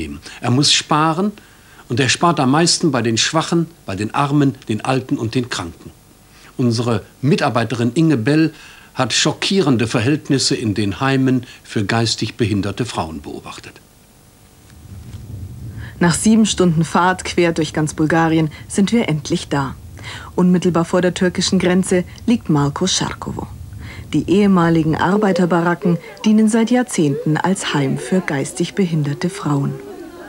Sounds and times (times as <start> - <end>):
Speech: 0.0 - 6.0, 6.6 - 13.8, 16.0 - 30.2.